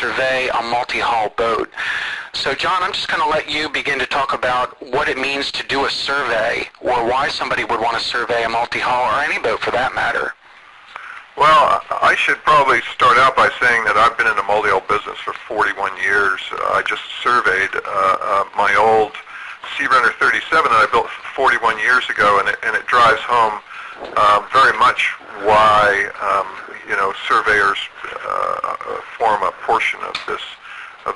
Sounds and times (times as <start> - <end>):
Speech: 0.0 - 10.4, 11.0 - 31.1.